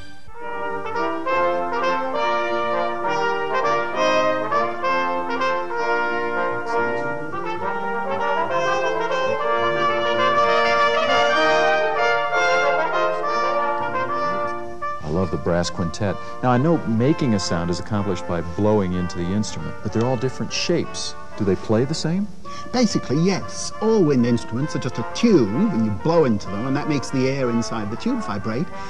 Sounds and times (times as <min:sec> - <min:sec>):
Music: 0:00.0 - 0:28.9
Speech: 0:14.0 - 0:28.7.